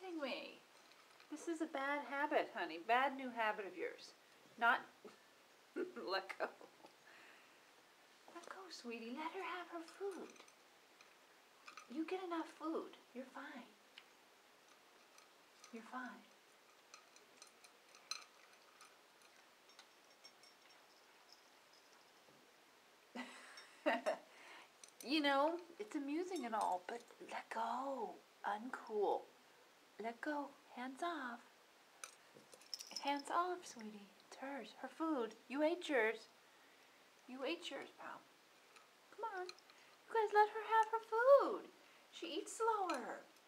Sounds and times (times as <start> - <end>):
Speech: 0.0 - 0.6, 1.3 - 5.0, 5.8 - 6.8, 8.3 - 10.4, 11.9 - 13.8, 15.7 - 16.3, 25.0 - 29.3, 30.0 - 31.5, 33.0 - 36.3, 37.3 - 38.2, 39.2 - 39.5, 40.1 - 43.3.